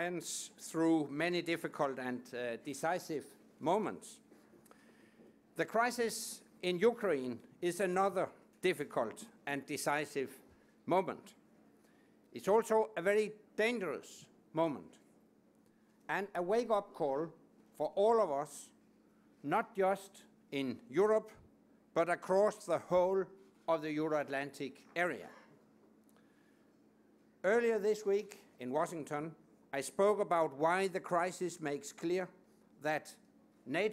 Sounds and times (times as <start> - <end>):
Male speech, man speaking: 0.0 - 4.2, 5.6 - 11.4, 12.4 - 15.0, 16.1 - 18.8, 19.4 - 21.4, 22.0 - 25.4, 27.4 - 33.9.